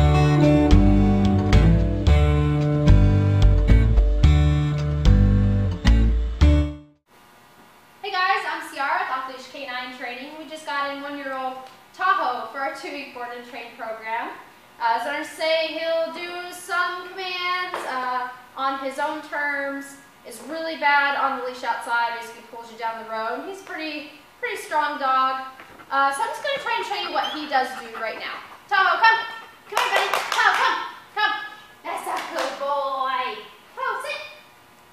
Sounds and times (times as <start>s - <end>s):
Speech: 8.0s - 34.4s.